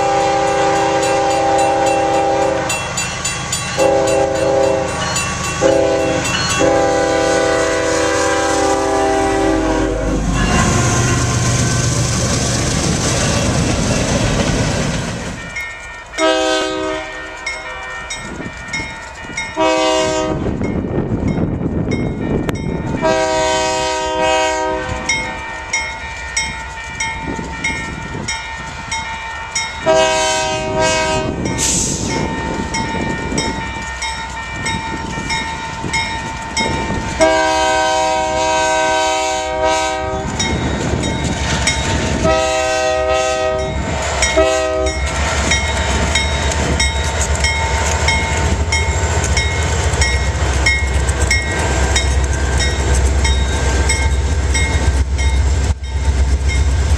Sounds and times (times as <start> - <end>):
Train horn: 0.0 - 2.8, 3.8 - 11.9, 16.2 - 18.0, 19.6 - 20.6, 23.0 - 25.5, 29.8 - 31.5, 37.2 - 40.5, 42.1 - 45.1
Railroad car, train wagon: 0.0 - 56.9.